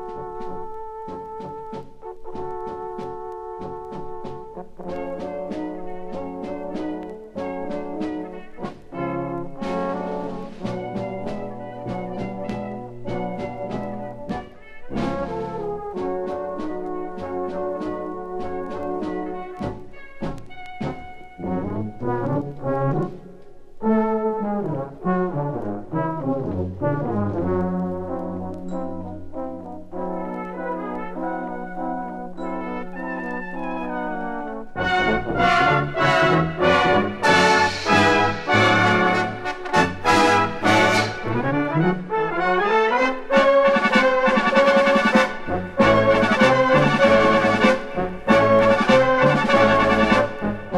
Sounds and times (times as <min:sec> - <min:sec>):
Brass instrument: 0:00.0 - 0:50.7.